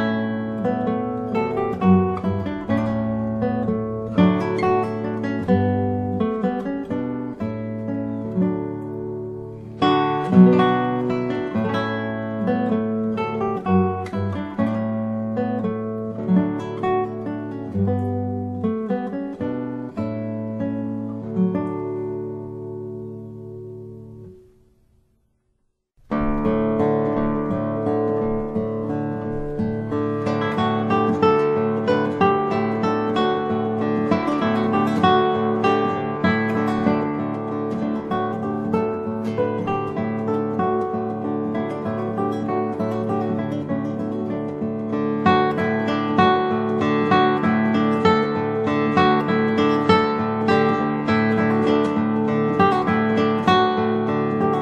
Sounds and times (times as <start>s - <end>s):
Guitar: 0.0s - 54.6s.